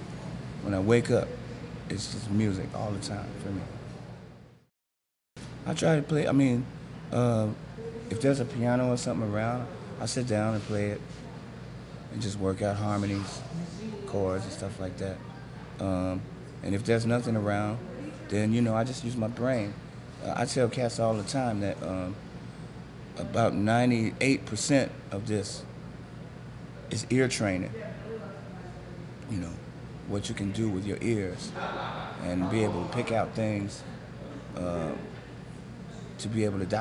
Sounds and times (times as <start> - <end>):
Speech: 0.6 - 3.8, 5.6 - 22.2, 23.1 - 25.7, 26.9 - 35.2, 35.9 - 36.8.